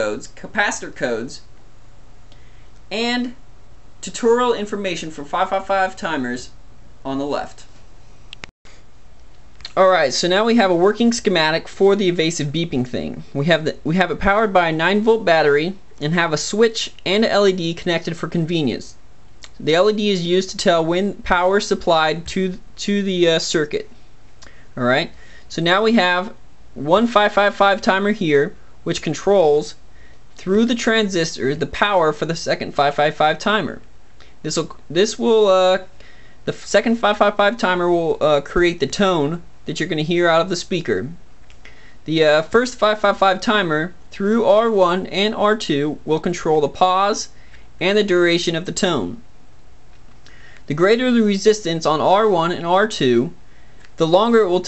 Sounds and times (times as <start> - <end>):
Speech: 0.0 - 1.5, 2.9 - 3.4, 4.0 - 7.8, 9.6 - 24.0, 24.8 - 29.8, 30.4 - 41.2, 42.0 - 49.3, 50.7 - 53.4, 54.0 - 54.6.